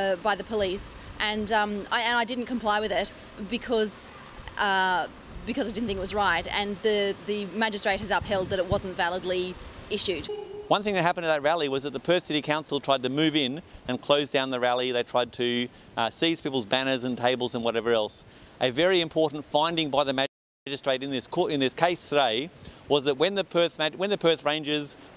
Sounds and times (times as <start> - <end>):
Female speech, woman speaking: 0.0 - 10.3
Narration, monologue: 0.0 - 25.1
Male speech, man speaking: 10.7 - 25.0.